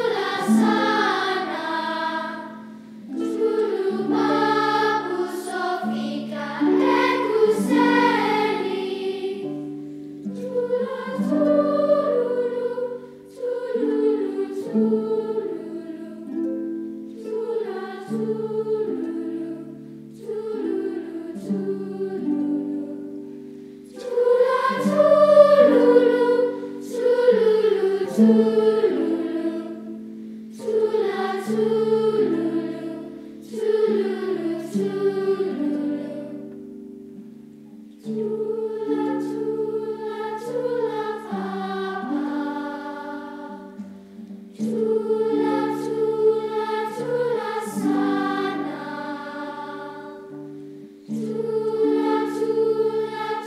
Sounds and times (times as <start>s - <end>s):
Music: 0.0s - 53.4s.